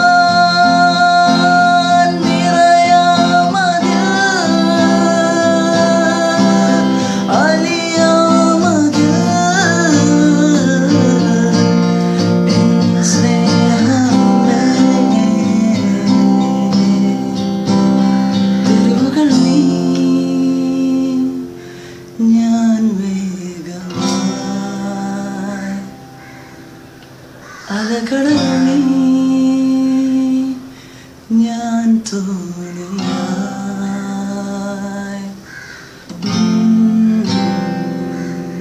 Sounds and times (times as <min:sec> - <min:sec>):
Acoustic guitar: 0:00.0 - 0:38.6.